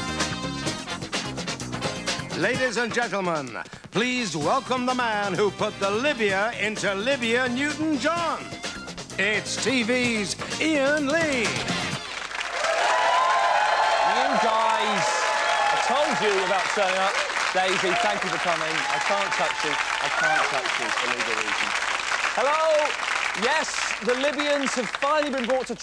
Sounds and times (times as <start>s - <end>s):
Speech: 2.4s - 8.4s, 9.2s - 11.6s, 14.1s - 21.7s, 22.4s - 25.8s.